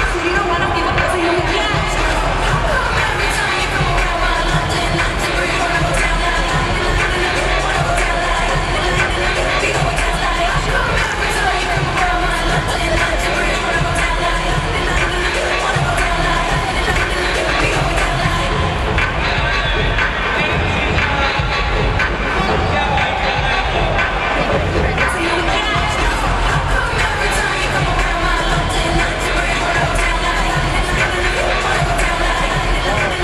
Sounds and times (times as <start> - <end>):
Crowd: 0.0 - 33.2.